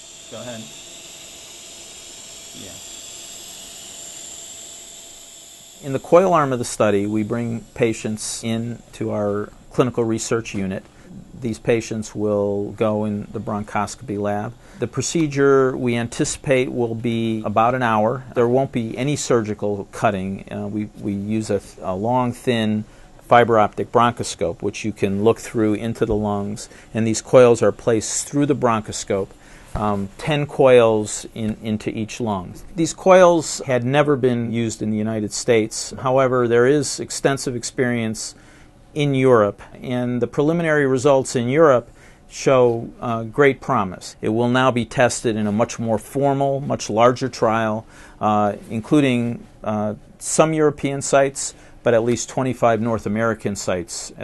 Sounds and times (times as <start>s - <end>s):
Inside, small room: 0.0s - 54.2s
Speech: 0.3s - 0.7s, 2.6s - 2.8s, 5.8s - 38.4s, 39.0s - 54.2s.